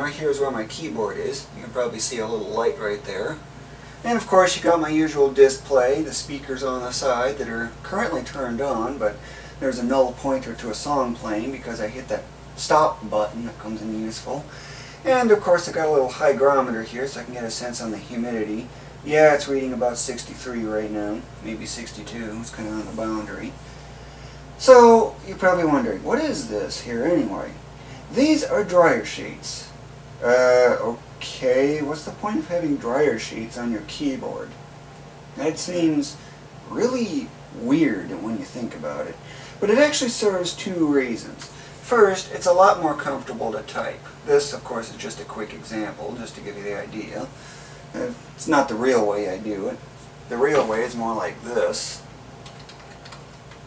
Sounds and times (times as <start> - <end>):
Speech: 0.0 - 23.6, 24.6 - 34.6, 35.4 - 52.1.